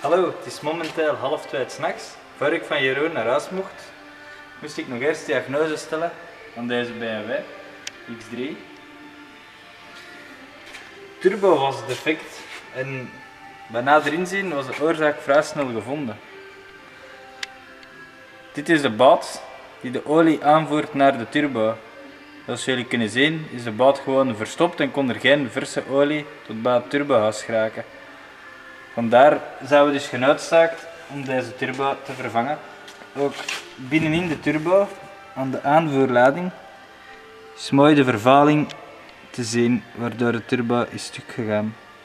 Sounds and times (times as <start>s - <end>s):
Speech: 0.0s - 3.9s, 4.6s - 7.5s, 8.1s - 8.6s, 11.2s - 16.2s, 18.6s - 21.8s, 22.5s - 27.8s, 29.0s - 32.6s, 33.2s - 36.6s, 37.6s - 38.8s, 39.4s - 41.8s.